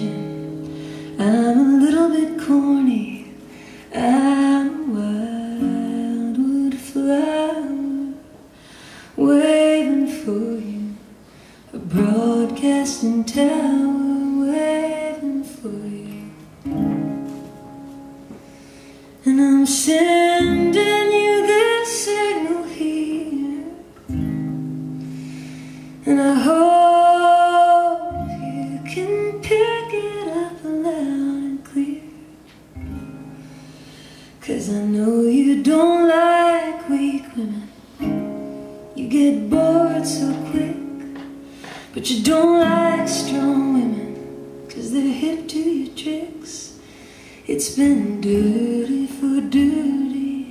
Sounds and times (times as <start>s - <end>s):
Music: 0.0s - 50.5s.